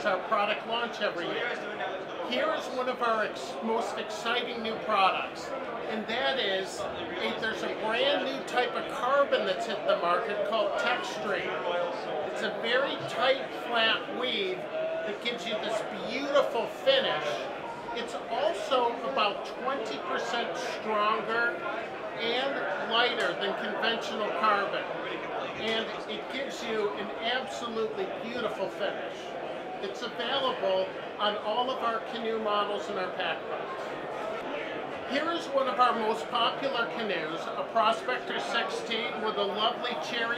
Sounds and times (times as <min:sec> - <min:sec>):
Speech: 0:00.0 - 0:33.8, 0:34.4 - 0:40.3.